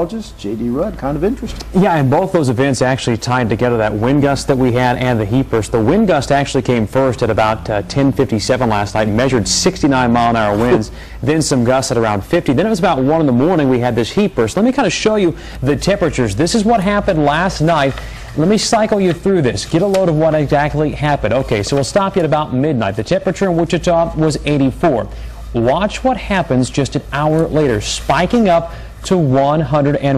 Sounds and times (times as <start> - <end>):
Speech: 0.0 - 30.1.